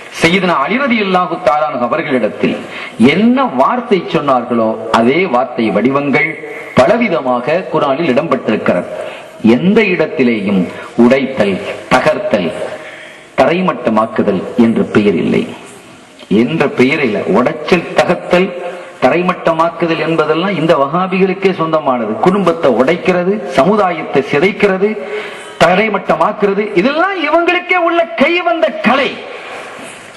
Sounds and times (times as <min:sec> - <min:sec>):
Narration, monologue: 0:00.0 - 0:30.1.